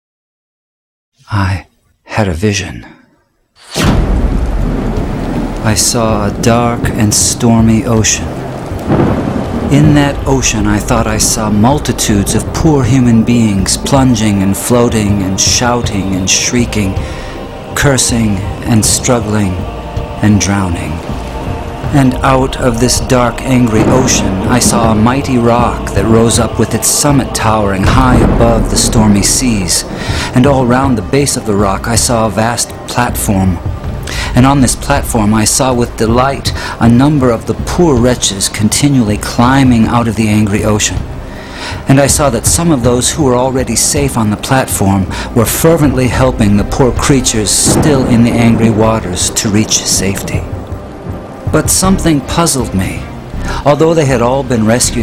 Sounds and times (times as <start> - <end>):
Thunder: 3.7 - 38.6, 45.9 - 53.1
Rain on surface: 3.9 - 55.0.